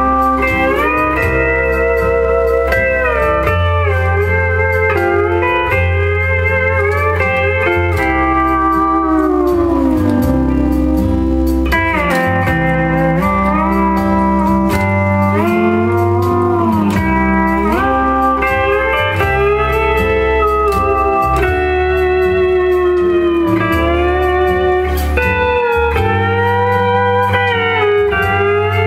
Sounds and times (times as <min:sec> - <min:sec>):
Steel guitar, slide guitar: 0:00.0 - 0:28.8.